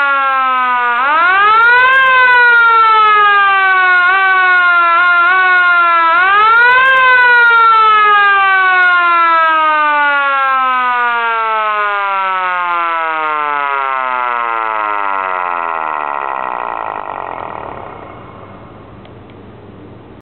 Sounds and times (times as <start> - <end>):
Civil defense siren: 0.0 - 19.1.